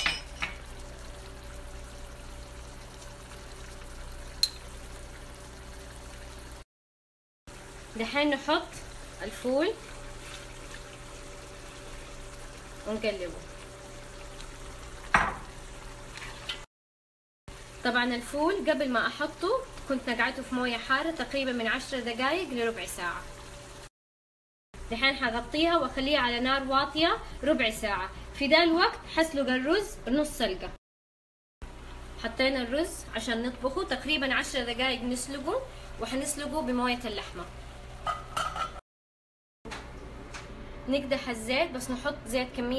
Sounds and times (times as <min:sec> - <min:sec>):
Speech: 0:08.0 - 0:09.8, 0:12.9 - 0:13.5, 0:17.9 - 0:23.2, 0:24.9 - 0:30.8, 0:32.2 - 0:37.5, 0:40.9 - 0:42.7.